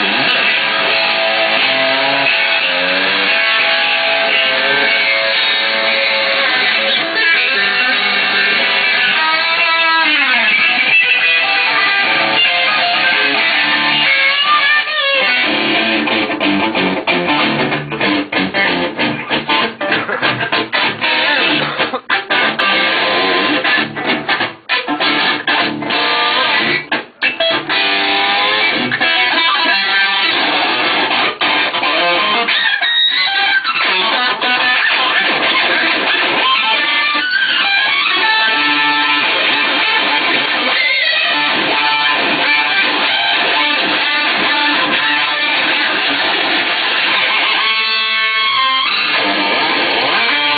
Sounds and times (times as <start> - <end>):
Guitar: 0.0 - 50.5.